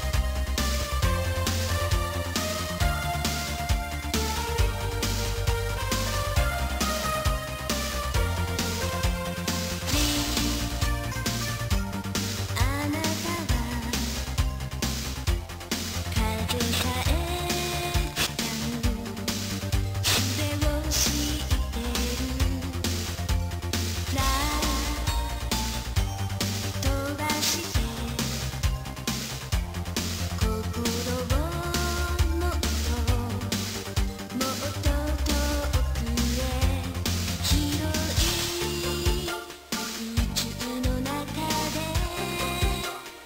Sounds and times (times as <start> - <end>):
Music: 0.0 - 43.2.